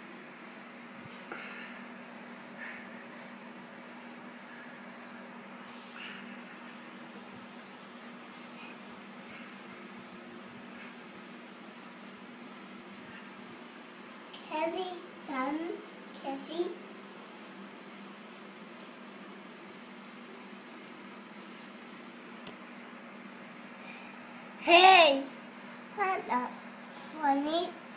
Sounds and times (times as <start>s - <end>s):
Speech: 14.4s - 16.8s, 24.6s - 25.4s, 26.0s - 27.8s.